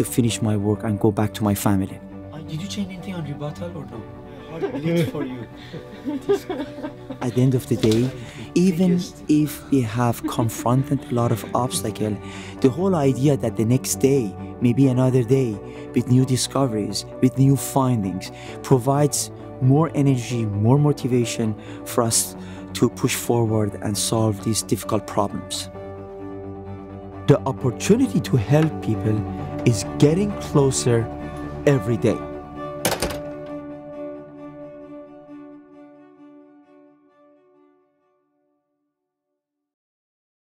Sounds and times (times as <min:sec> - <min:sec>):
Speech: 0:00.0 - 0:04.0, 0:07.2 - 0:25.7, 0:27.3 - 0:31.1, 0:31.7 - 0:32.3
Music: 0:00.0 - 0:39.4.